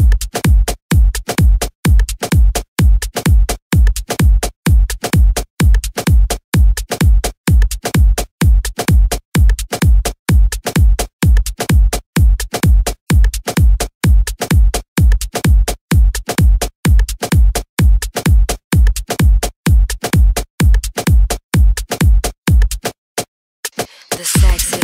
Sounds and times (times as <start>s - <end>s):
Music: 0.0s - 24.8s.